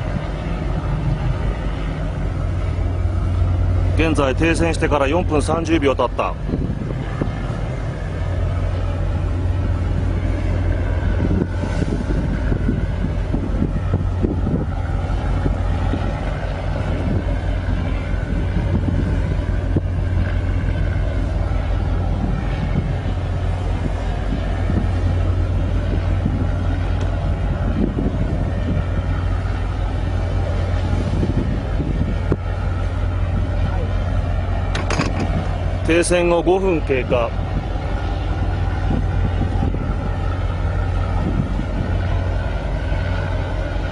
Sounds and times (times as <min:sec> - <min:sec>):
Boat, Water vehicle: 0:00.0 - 0:43.9
Speech: 0:04.0 - 0:06.4, 0:35.8 - 0:37.4.